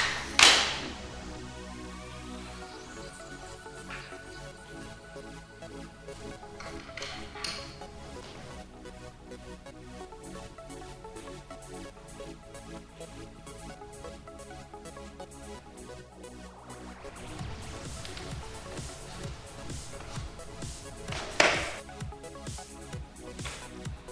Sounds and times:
Music: 0.0s - 24.1s.

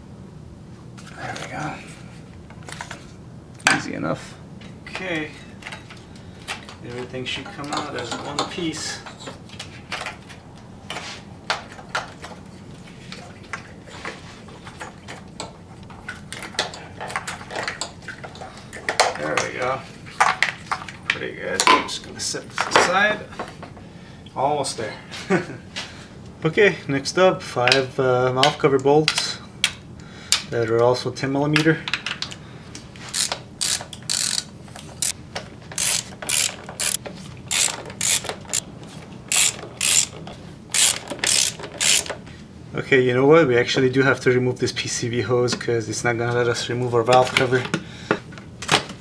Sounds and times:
Mechanisms: 0.0s - 49.0s.

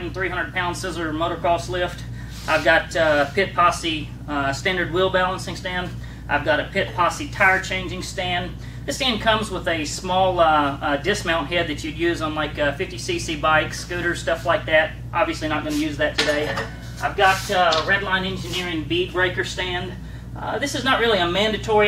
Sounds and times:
Speech: 0.0s - 21.8s.

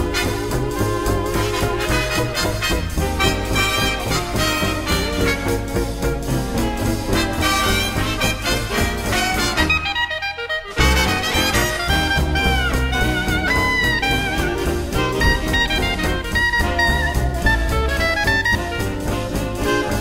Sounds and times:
Orchestra: 0.0s - 20.0s.

